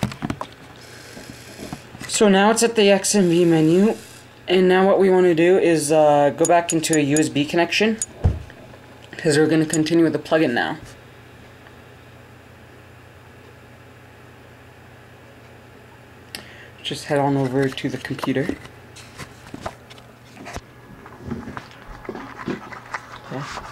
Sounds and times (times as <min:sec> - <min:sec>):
Speech: 0:02.1 - 0:08.0, 0:09.2 - 0:10.9, 0:16.8 - 0:18.6.